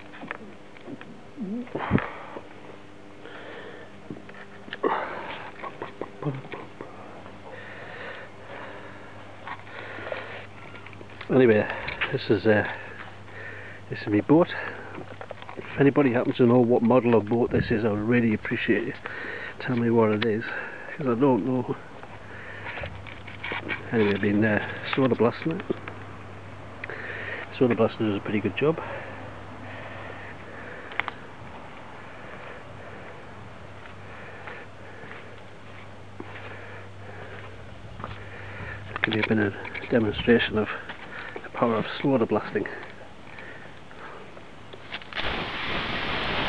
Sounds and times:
Speech: 6.2s - 6.6s, 11.2s - 12.8s, 13.9s - 14.8s, 15.6s - 19.0s, 19.6s - 21.8s, 23.9s - 25.8s, 27.5s - 28.9s, 39.1s - 40.8s, 41.5s - 42.9s.

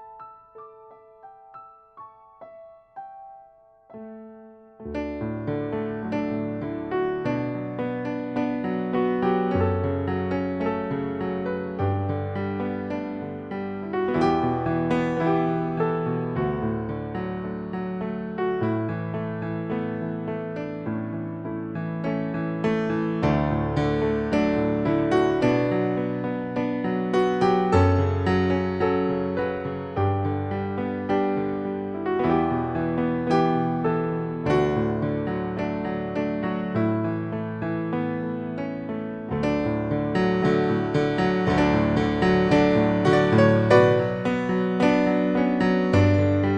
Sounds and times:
Piano: 0.0s - 46.5s.

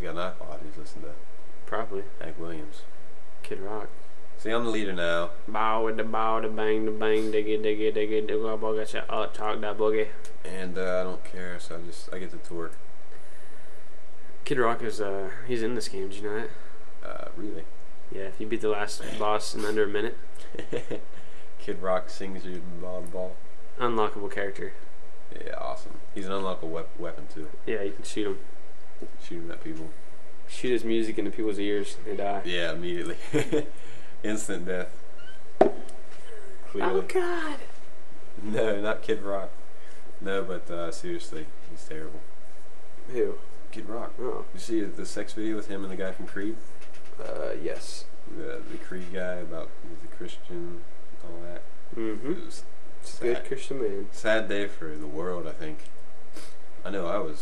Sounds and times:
Speech: 0.0s - 12.8s, 14.4s - 21.0s, 21.6s - 28.4s, 29.0s - 34.9s, 36.3s - 37.7s, 38.4s - 39.6s, 40.2s - 42.2s, 43.1s - 46.6s, 47.2s - 55.9s, 56.8s - 57.4s.

